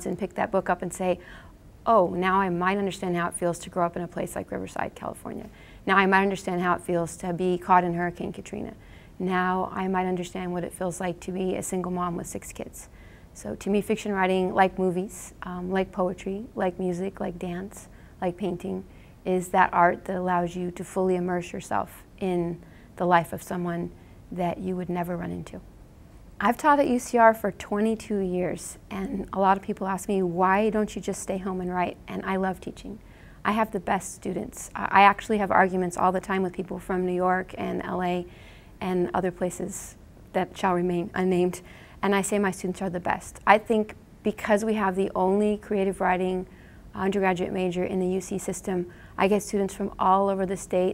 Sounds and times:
Speech: 0.0 - 1.2, 1.9 - 25.6, 26.4 - 50.9.

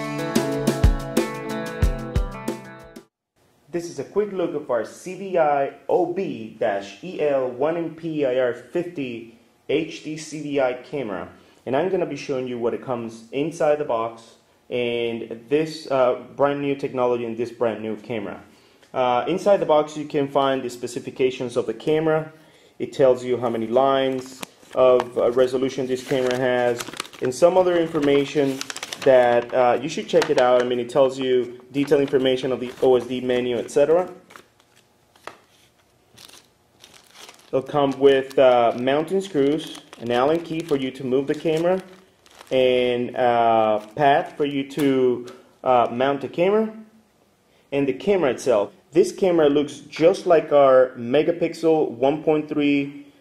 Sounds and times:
Speech: 3.7 - 34.2, 37.5 - 46.9, 47.7 - 53.1.

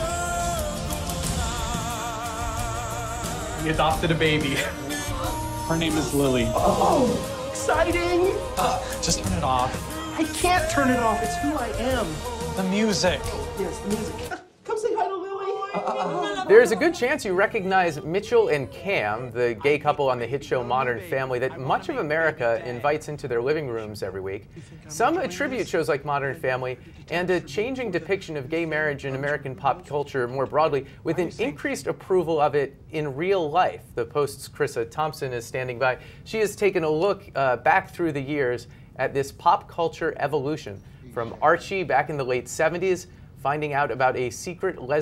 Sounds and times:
Speech: 5.7 - 45.0.

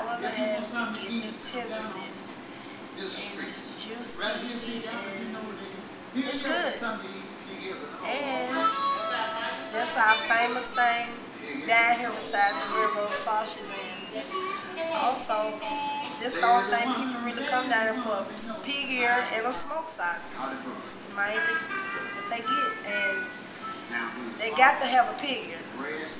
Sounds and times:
Speech: 0.0 - 2.4, 3.0 - 14.2, 24.0 - 26.1
Music: 8.5 - 10.3, 14.0 - 16.2, 21.4 - 24.4.

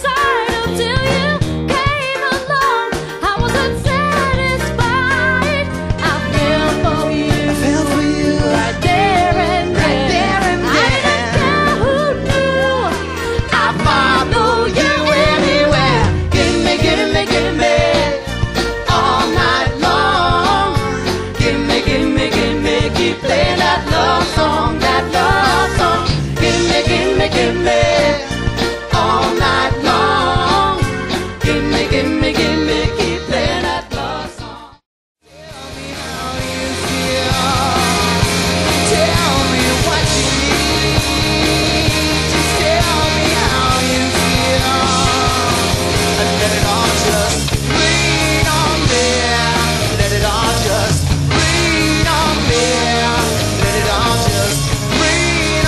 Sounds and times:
Pop music: 0.0 - 55.6.

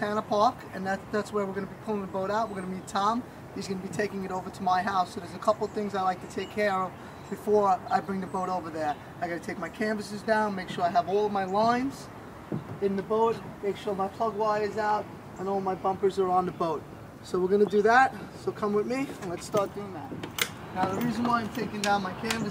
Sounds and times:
Speech: 0.0 - 12.1, 12.8 - 22.5.

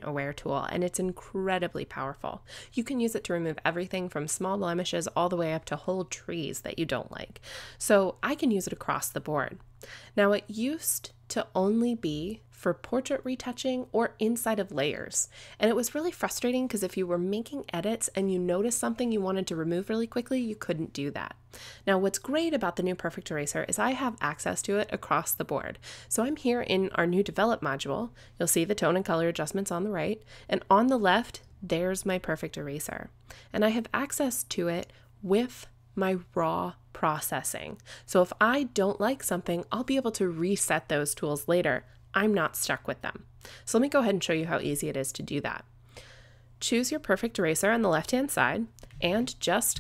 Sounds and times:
Speech: 0.0 - 9.6, 10.2 - 45.6, 46.6 - 49.8.

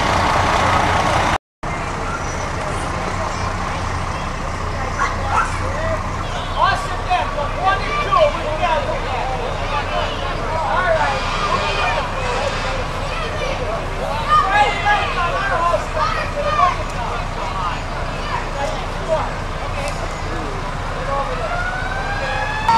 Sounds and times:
Truck: 0.0 - 22.7
Speech: 1.7 - 21.6.

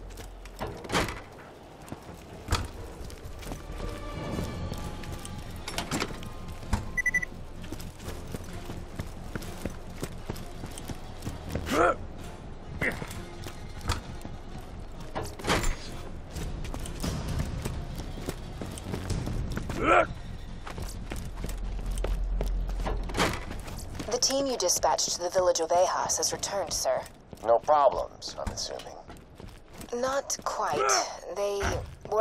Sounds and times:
Run: 0.0 - 11.7, 16.2 - 24.2, 29.0 - 30.5
Music: 0.0 - 27.2.

